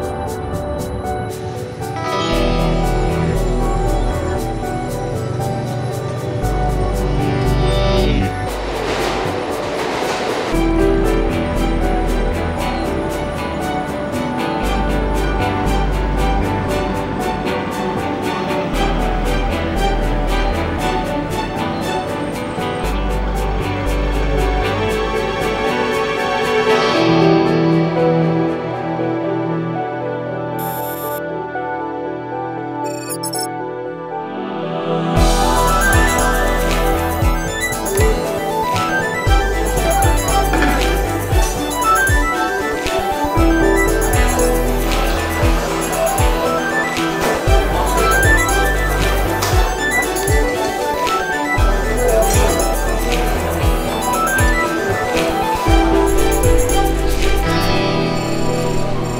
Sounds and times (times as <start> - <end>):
New-age music: 0.0 - 59.1.